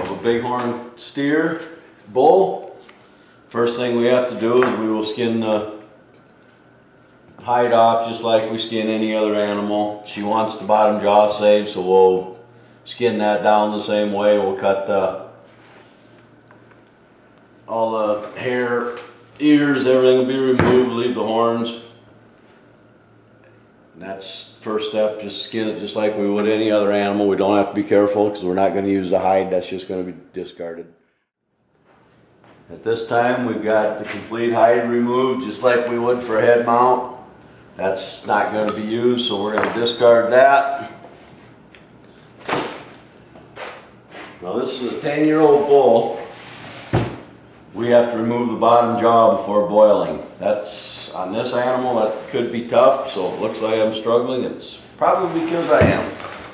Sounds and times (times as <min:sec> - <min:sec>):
Speech: 0:00.0 - 0:02.8, 0:03.5 - 0:05.9, 0:07.4 - 0:15.4, 0:17.7 - 0:21.9, 0:24.0 - 0:31.0, 0:32.7 - 0:41.0, 0:44.4 - 0:46.3, 0:47.7 - 0:56.3.